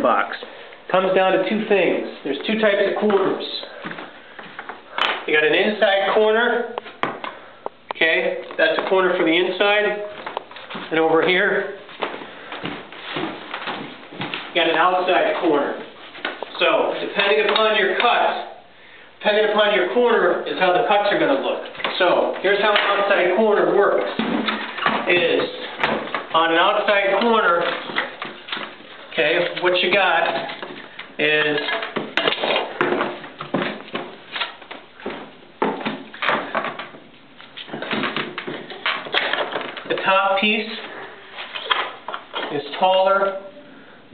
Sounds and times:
Speech: 0.0 - 3.8, 5.3 - 6.8, 8.0 - 10.2, 10.9 - 11.8, 14.5 - 18.6, 19.2 - 24.2, 24.9 - 28.0, 29.1 - 30.6, 31.2 - 31.9, 39.9 - 41.0, 42.4 - 43.6.

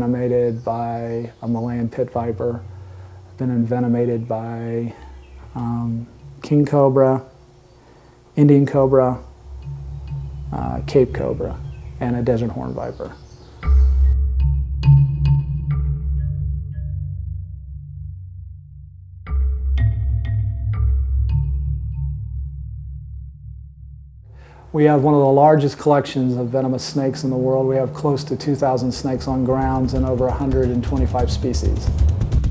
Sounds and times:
Speech: 0.0 - 2.6, 3.4 - 5.0, 5.6 - 7.3, 8.4 - 9.3, 10.5 - 13.2, 24.7 - 32.0
Music: 9.3 - 12.8, 13.4 - 24.5, 26.9 - 32.5.

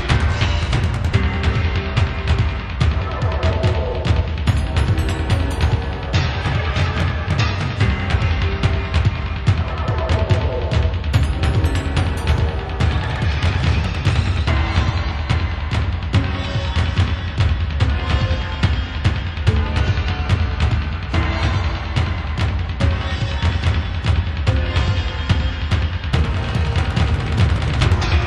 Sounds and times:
Music: 0.0 - 28.2.

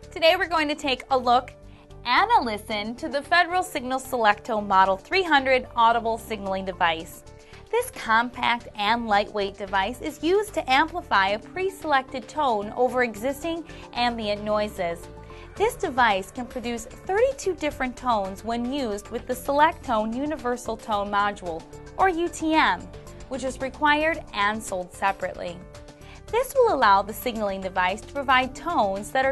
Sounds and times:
Music: 0.0 - 29.3
Speech: 0.2 - 1.5, 2.1 - 15.0, 15.6 - 25.6, 26.3 - 29.3.

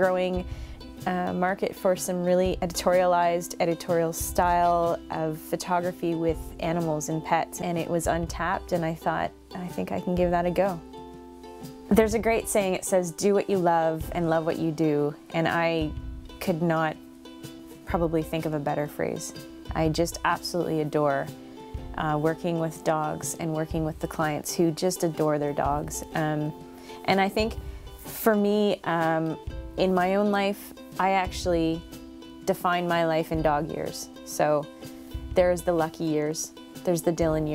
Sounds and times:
Speech: 0.0 - 0.4, 1.0 - 10.8, 11.9 - 17.0, 17.8 - 21.3, 22.0 - 31.8, 32.5 - 34.6, 35.4 - 37.5
Music: 0.0 - 37.5.

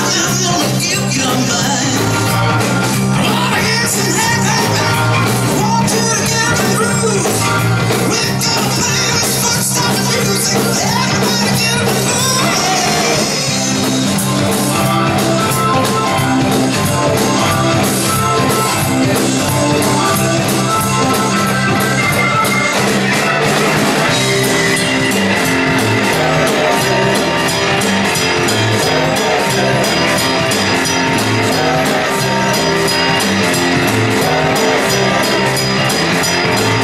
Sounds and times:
Music: 0.0 - 36.8.

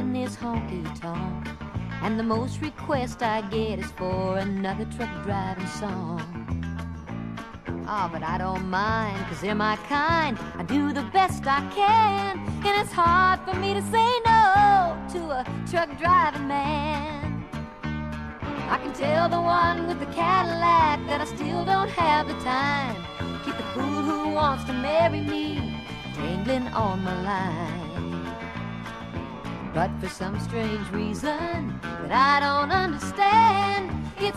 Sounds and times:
Music: 0.0 - 34.3.

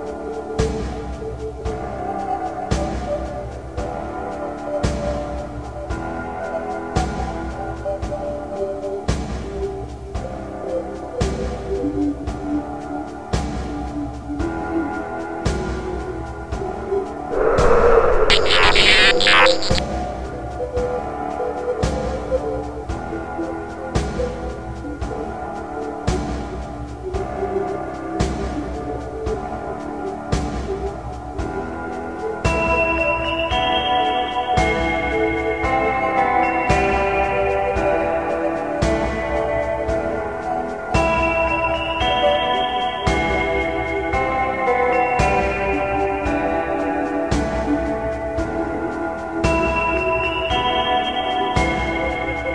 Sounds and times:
Ambient music: 0.0 - 52.5.

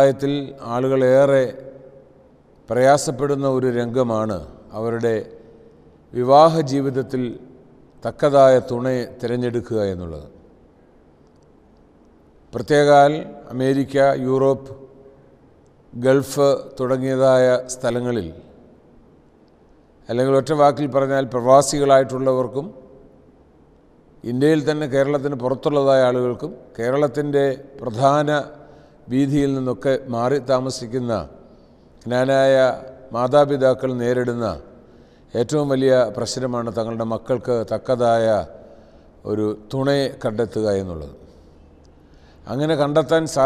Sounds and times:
Male speech, man speaking: 0.0 - 1.6, 2.7 - 5.3, 6.2 - 7.4, 8.0 - 10.3, 12.6 - 14.8, 16.0 - 18.4, 20.1 - 22.7, 24.2 - 28.5, 29.1 - 31.3, 32.1 - 34.7, 35.3 - 38.5, 39.2 - 41.2, 42.5 - 43.4.

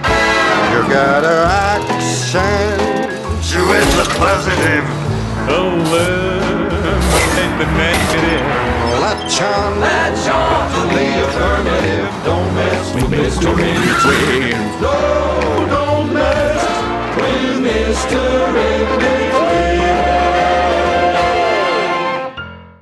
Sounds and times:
Male singing: 0.6 - 22.3
Choir: 5.5 - 22.4.

